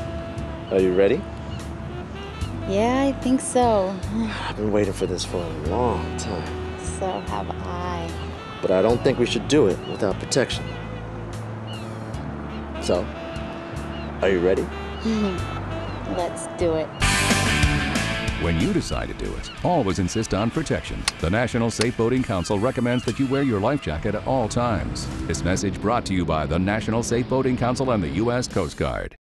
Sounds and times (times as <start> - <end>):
Music: 0.0 - 29.2
Speech: 18.4 - 29.2.